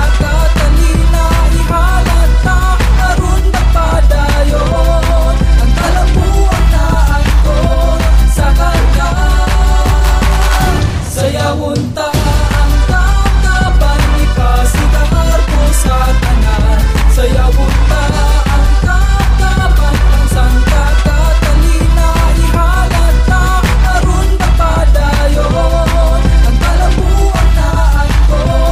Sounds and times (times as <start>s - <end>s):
Music: 0.0s - 28.7s.